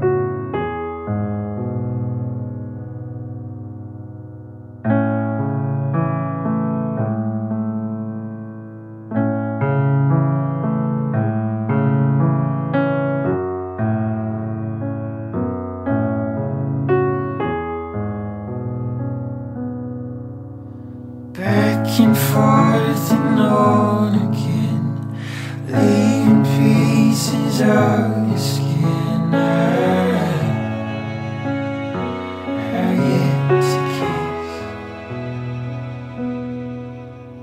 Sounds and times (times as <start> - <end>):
Music: 0.0 - 37.4.